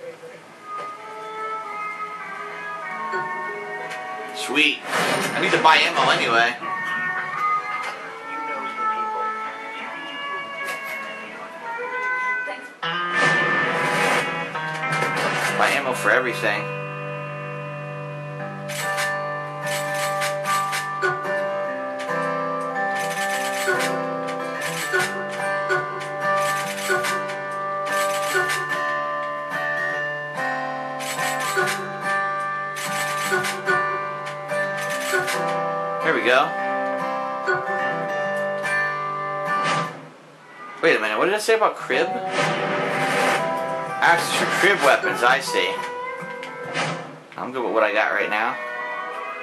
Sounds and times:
Music: 0.3s - 41.1s, 41.7s - 49.4s.

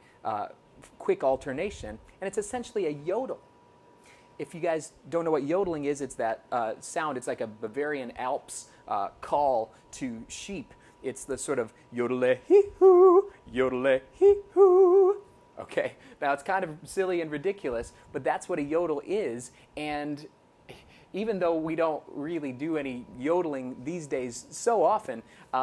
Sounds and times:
Yodeling: 12.4s - 13.4s, 14.2s - 15.3s.

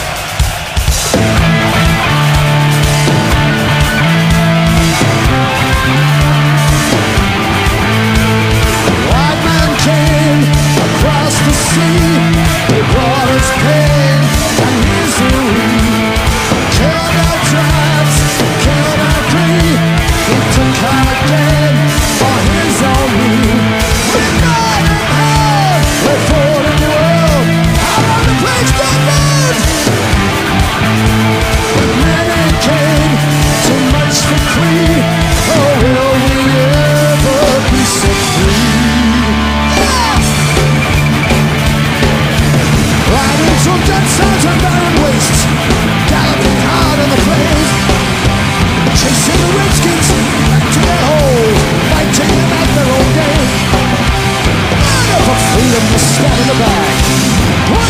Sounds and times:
Music: 0.0s - 57.8s.

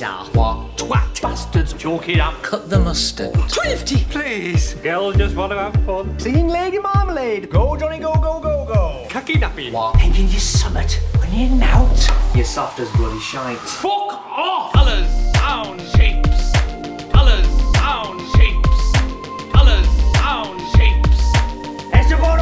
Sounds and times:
Music: 0.0s - 13.8s, 14.7s - 22.4s
Speech: 0.0s - 16.5s, 17.2s - 19.0s, 19.6s - 21.1s, 22.0s - 22.4s.

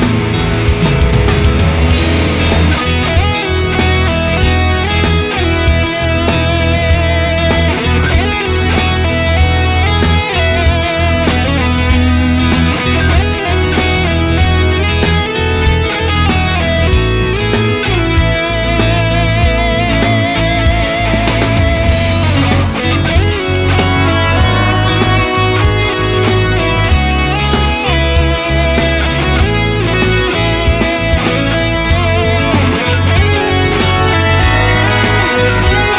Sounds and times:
Strum: 0.0s - 15.0s, 17.9s - 35.9s.

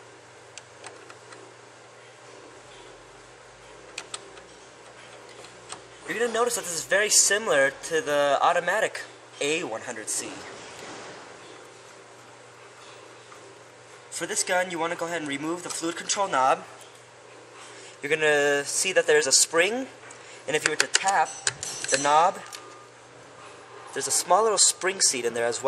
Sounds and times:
Speech: 6.1s - 10.6s, 14.1s - 16.8s, 18.0s - 22.5s, 23.9s - 25.6s.

